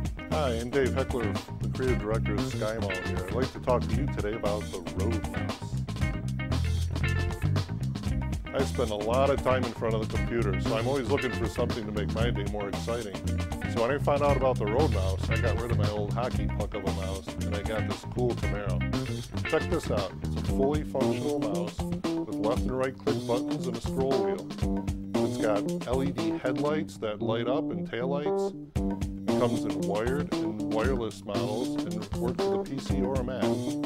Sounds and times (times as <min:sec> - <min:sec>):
Music: 0:00.0 - 0:33.8
Speech: 0:00.3 - 0:05.8, 0:08.5 - 0:24.5, 0:25.2 - 0:28.5, 0:29.3 - 0:33.7.